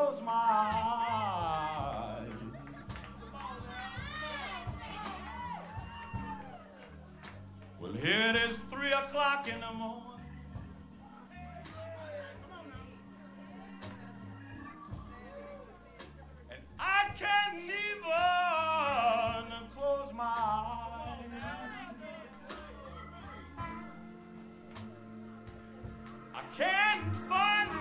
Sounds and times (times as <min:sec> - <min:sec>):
Speech: 0:00.0 - 0:05.3, 0:06.8 - 0:24.0
Music: 0:00.0 - 0:27.8.